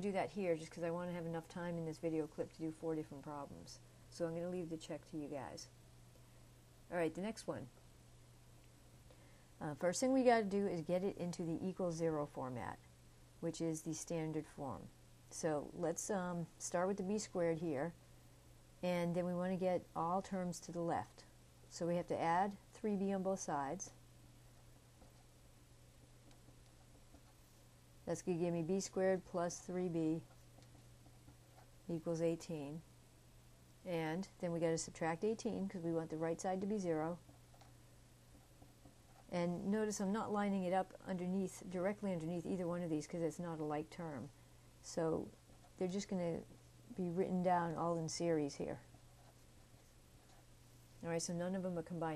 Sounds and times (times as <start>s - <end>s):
Speech: 0.0s - 5.7s, 6.9s - 7.8s, 9.6s - 12.8s, 13.4s - 18.0s, 18.8s - 24.0s, 28.1s - 30.3s, 31.9s - 32.8s, 33.8s - 37.2s, 39.3s - 48.9s, 51.0s - 52.1s
Inside, small room: 0.0s - 52.1s.